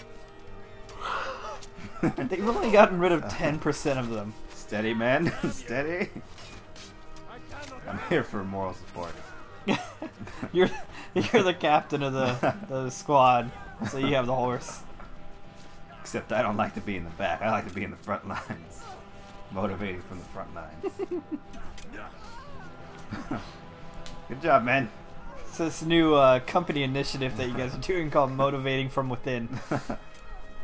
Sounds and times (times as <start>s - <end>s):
Music: 0.0s - 30.6s.